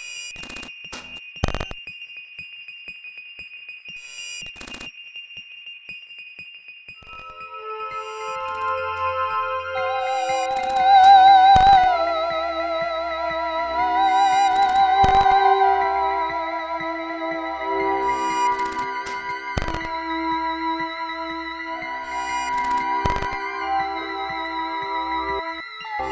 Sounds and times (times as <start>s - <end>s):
Musical instrument: 7.0s - 26.1s.